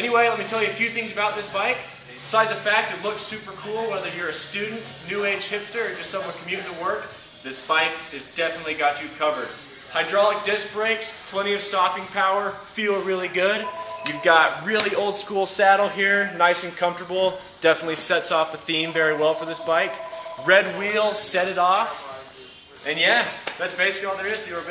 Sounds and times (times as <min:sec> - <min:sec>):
Speech: 0:00.0 - 0:24.7.